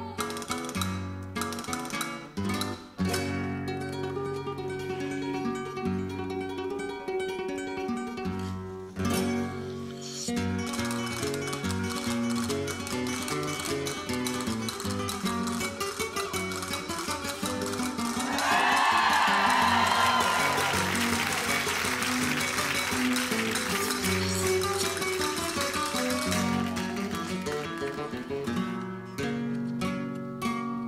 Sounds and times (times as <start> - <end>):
Flamenco: 0.0 - 30.8.